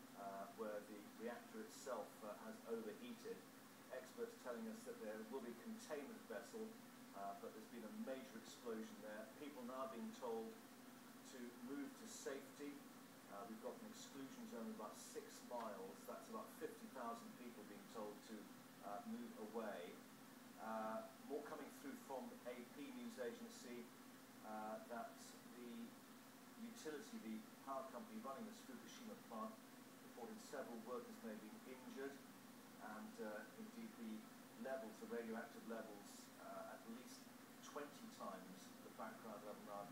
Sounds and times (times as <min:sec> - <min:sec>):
Speech: 0:00.0 - 0:10.6, 0:11.2 - 0:26.0, 0:26.6 - 0:39.9.